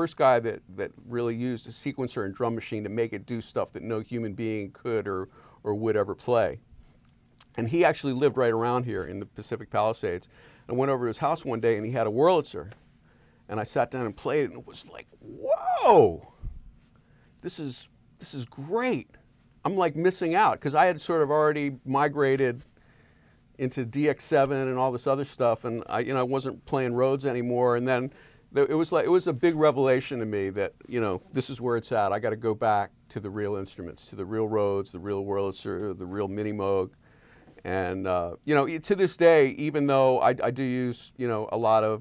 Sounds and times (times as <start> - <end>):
Speech: 0.0 - 6.6, 7.4 - 12.8, 13.5 - 16.4, 17.4 - 22.6, 23.6 - 37.0, 37.6 - 42.0.